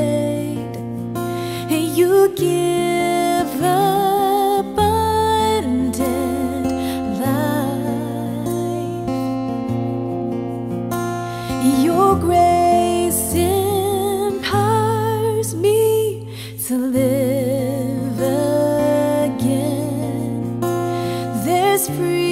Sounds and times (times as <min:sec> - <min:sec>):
Music: 0:00.0 - 0:22.3.